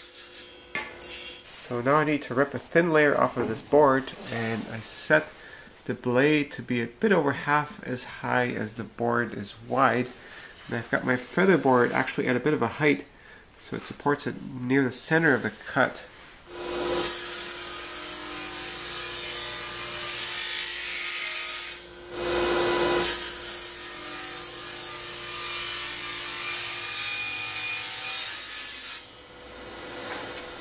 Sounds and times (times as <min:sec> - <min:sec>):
Speech: 0:01.7 - 0:16.1.